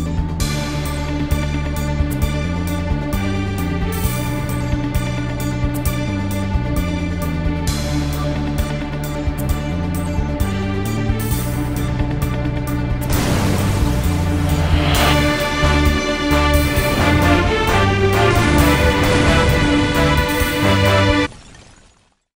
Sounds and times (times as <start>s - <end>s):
Music: 0.0s - 21.3s.